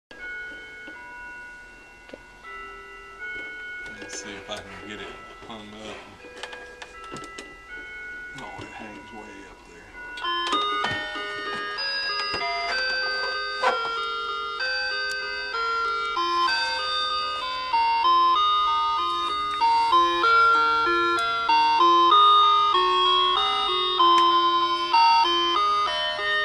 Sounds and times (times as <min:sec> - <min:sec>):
Clock: 0:00.1 - 0:01.4, 0:02.0 - 0:09.4, 0:10.0 - 0:26.4
Music: 0:00.2 - 0:26.4
Speech: 0:03.9 - 0:06.1, 0:08.4 - 0:10.0.